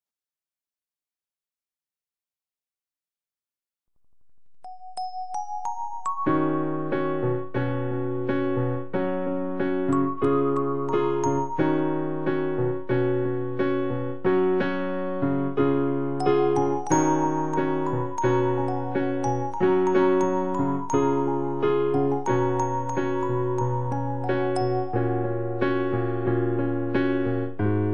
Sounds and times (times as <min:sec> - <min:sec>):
Piano: 0:04.7 - 0:27.9.